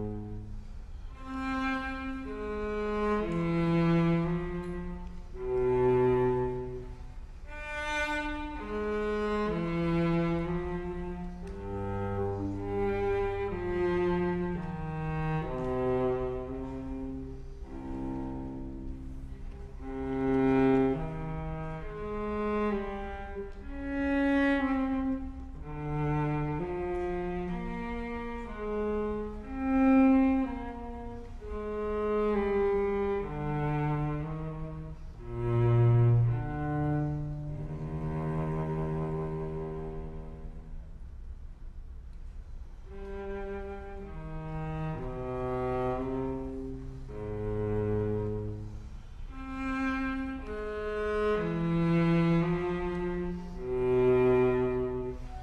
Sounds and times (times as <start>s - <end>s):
Cello: 0.0s - 55.4s.